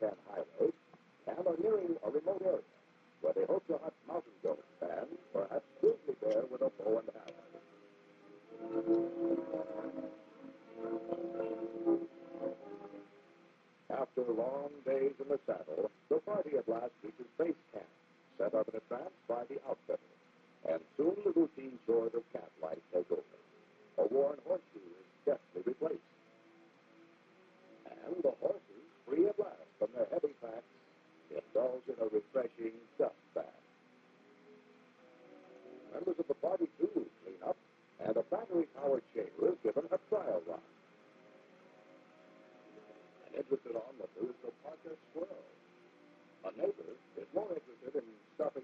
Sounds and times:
Speech: 0.0 - 7.4, 13.9 - 20.0, 20.6 - 23.4, 24.0 - 26.0, 27.8 - 30.7, 31.3 - 33.6, 35.9 - 40.7, 43.2 - 45.6, 46.4 - 48.6
Music: 0.0 - 48.6.

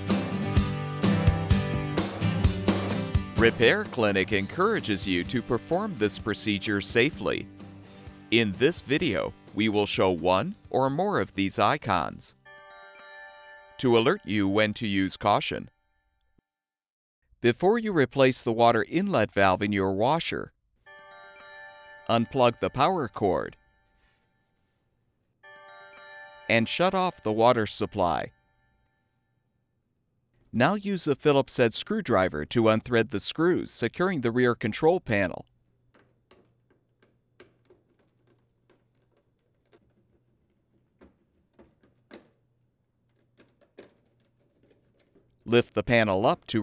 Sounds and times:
Speech: 3.4 - 7.5, 8.4 - 12.4, 13.8 - 15.7, 17.4 - 20.5, 22.1 - 23.6, 26.5 - 28.3, 30.6 - 35.5, 45.5 - 46.6.

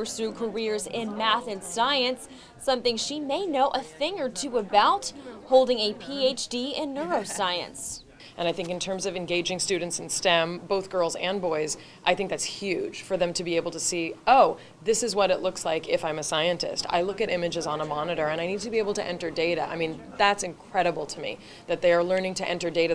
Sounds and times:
Speech: 0.0 - 22.9.

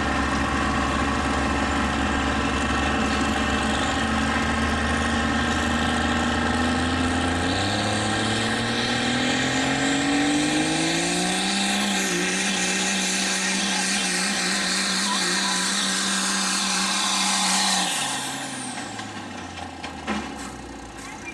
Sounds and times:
Car: 0.0 - 21.3
Speech: 13.3 - 15.9.

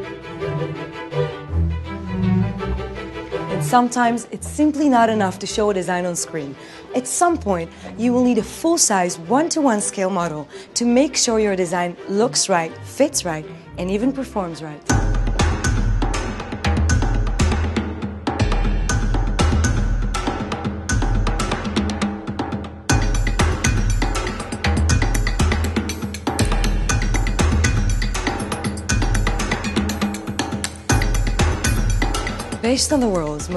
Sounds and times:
Music: 0.0 - 33.5
Speech: 3.7 - 14.9, 32.6 - 33.5.

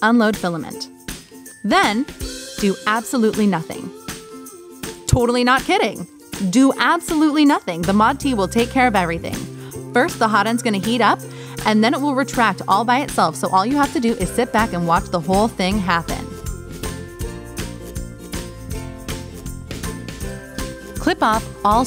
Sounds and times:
Speech: 0.0 - 0.9, 1.7 - 3.9, 5.1 - 16.3, 21.0 - 21.8
Music: 0.0 - 21.8.

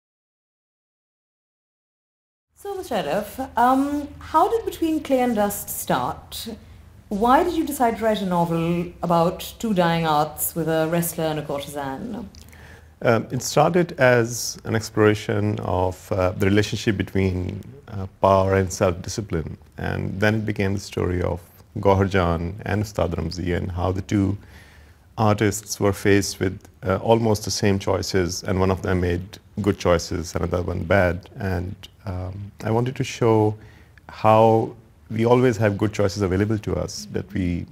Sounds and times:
Speech: 2.6 - 12.3, 13.0 - 24.4, 25.2 - 37.7.

